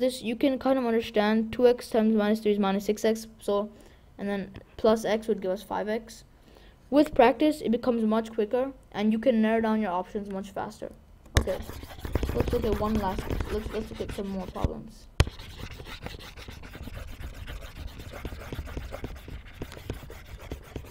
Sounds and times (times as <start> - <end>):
Speech: 0.0 - 6.3, 6.9 - 15.1.